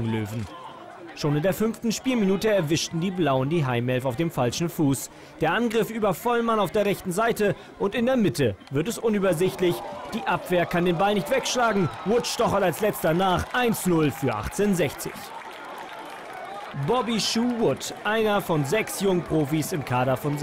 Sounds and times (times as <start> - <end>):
Speech: 0.0 - 15.3, 16.8 - 20.4.